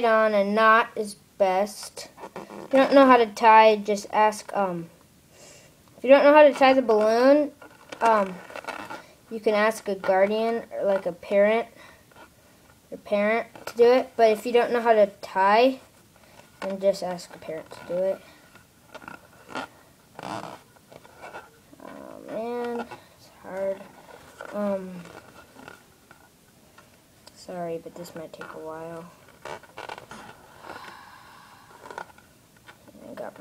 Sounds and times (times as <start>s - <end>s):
Child speech, kid speaking: 0.0s - 4.9s, 6.0s - 8.4s, 9.3s - 11.8s, 12.9s - 15.9s, 16.6s - 18.3s, 21.8s - 25.1s, 27.4s - 29.2s, 33.0s - 33.4s.